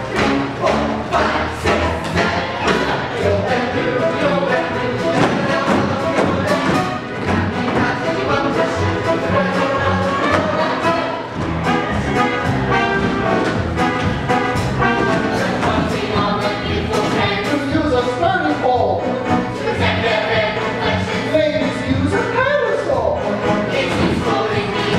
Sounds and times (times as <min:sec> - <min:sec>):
Music: 0:00.0 - 0:24.9.